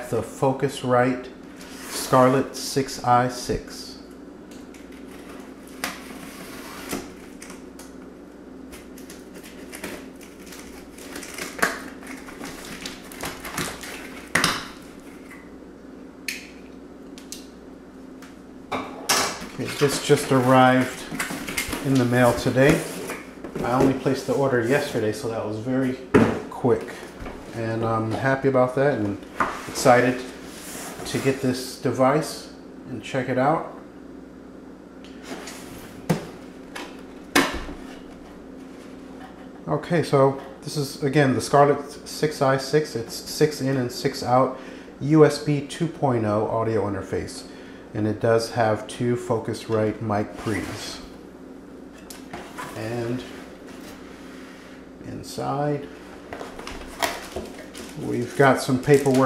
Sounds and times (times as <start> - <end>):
Speech: 0.0 - 1.4, 2.0 - 4.1, 19.6 - 21.2, 21.8 - 22.9, 23.6 - 29.2, 29.8 - 30.3, 31.0 - 33.8, 39.6 - 51.2, 52.7 - 53.4, 55.0 - 55.9, 57.9 - 59.2.